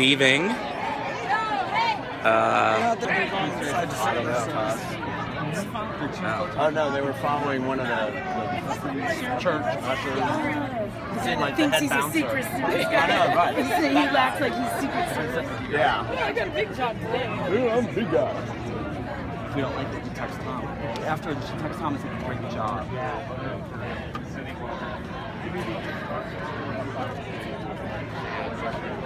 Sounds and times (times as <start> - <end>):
Chatter: 0.0 - 29.0
Crowd: 0.0 - 29.0.